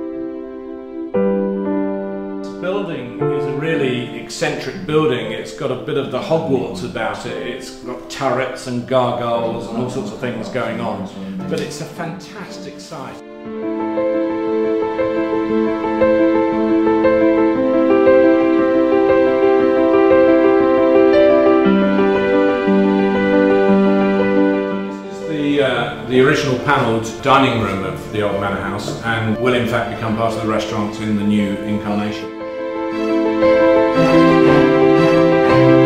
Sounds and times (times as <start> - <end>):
Music: 0.0 - 35.8
Speech: 2.5 - 13.2, 25.1 - 32.3.